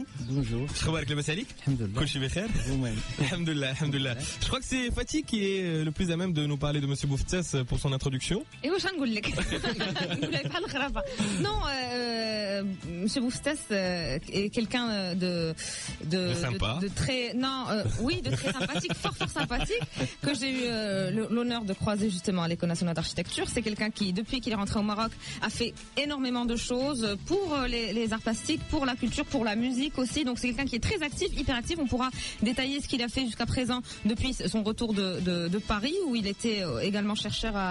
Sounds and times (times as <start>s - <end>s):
Music: 0.0s - 37.7s.